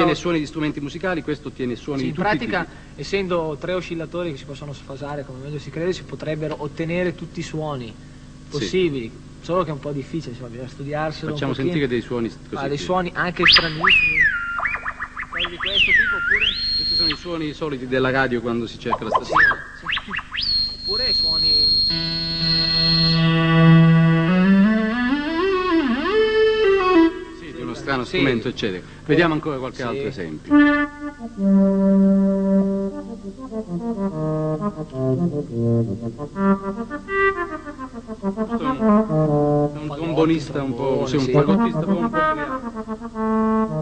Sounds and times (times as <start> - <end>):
Speech: 0.0 - 14.3, 15.4 - 20.0, 20.9 - 21.8, 27.4 - 30.6, 38.6 - 42.6.